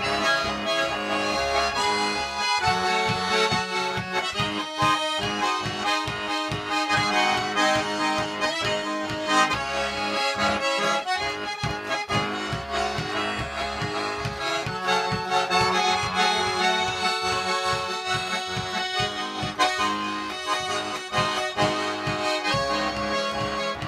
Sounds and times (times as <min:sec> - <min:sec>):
Accordion: 0:00.0 - 0:23.8
Traditional music: 0:00.0 - 0:23.8.